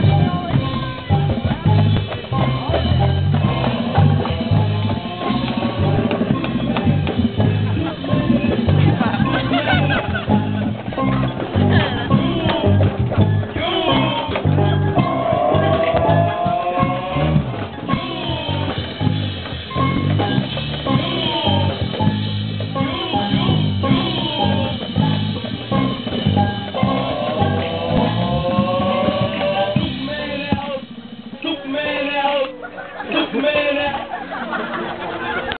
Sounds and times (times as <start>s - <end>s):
Percussion: 0.0s - 34.8s.